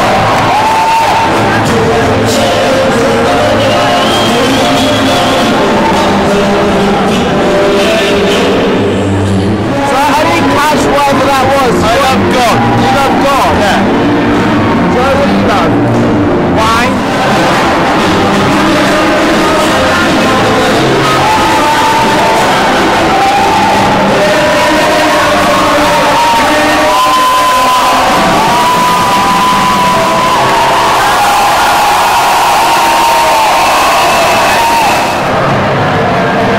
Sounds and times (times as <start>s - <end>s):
Inside, large room or hall: 0.0s - 36.5s.